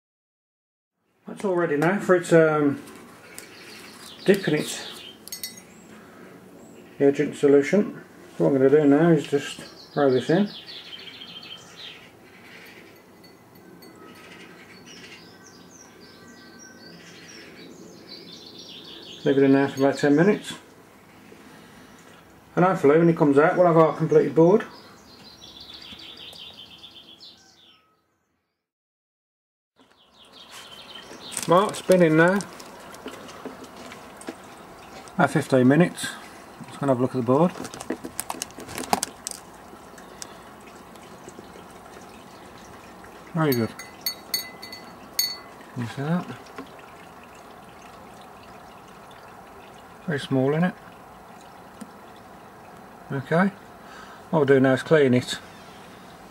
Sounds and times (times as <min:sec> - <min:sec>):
Water: 0:02.7 - 0:25.0, 0:30.2 - 0:56.3.